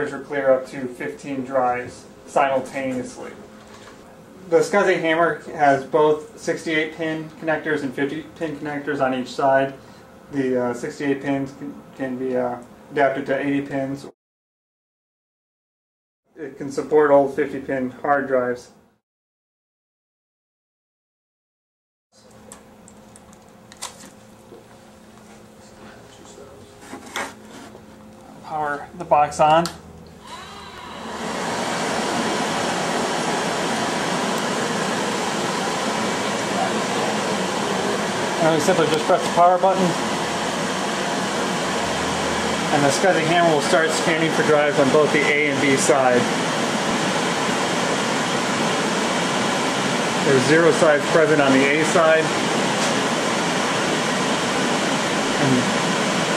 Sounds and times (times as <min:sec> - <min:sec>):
Speech: 0:00.0 - 0:03.4, 0:04.5 - 0:14.2, 0:16.3 - 0:18.8, 0:25.7 - 0:26.8, 0:28.3 - 0:29.8, 0:36.5 - 0:37.3, 0:38.4 - 0:40.0, 0:42.7 - 0:46.3, 0:50.2 - 0:52.4, 0:55.4 - 0:55.7.